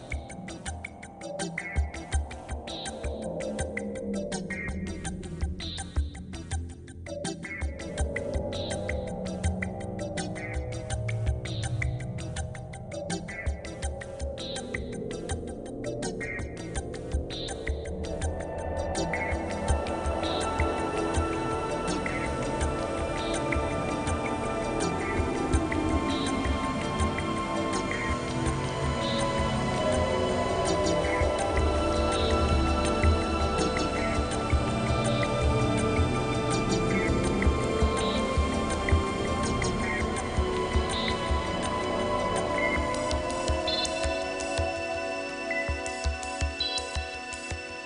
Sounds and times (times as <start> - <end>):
Music: 0.0 - 47.8.